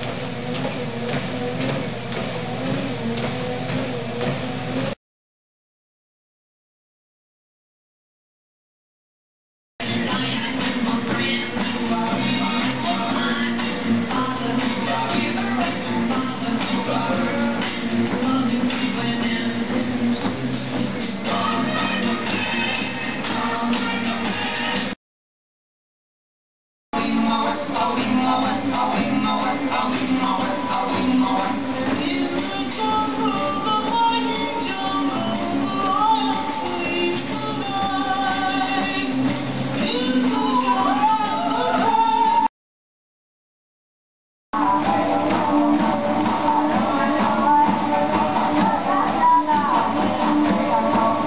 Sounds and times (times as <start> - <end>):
Music: 0.0 - 5.0, 9.8 - 25.0, 27.0 - 42.5, 44.6 - 51.2.